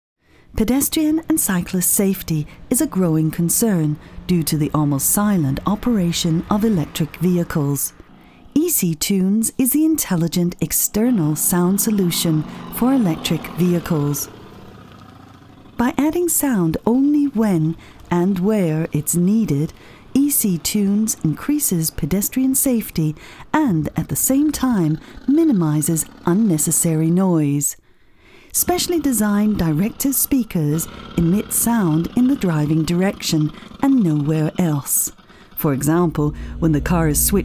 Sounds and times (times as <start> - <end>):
Speech: 0.6 - 8.0, 8.6 - 14.3, 15.8 - 27.8, 28.6 - 37.4.